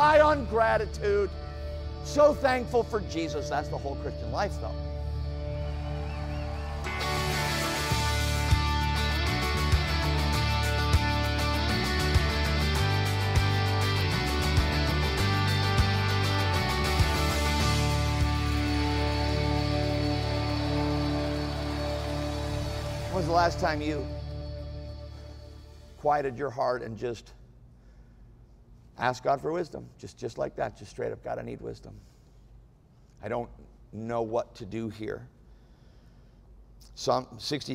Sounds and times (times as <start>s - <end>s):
Speech: 0.0s - 1.4s, 2.0s - 4.8s, 23.1s - 24.1s, 26.0s - 27.4s, 29.0s - 32.0s, 33.2s - 35.3s, 36.8s - 37.7s
Music: 0.0s - 26.0s.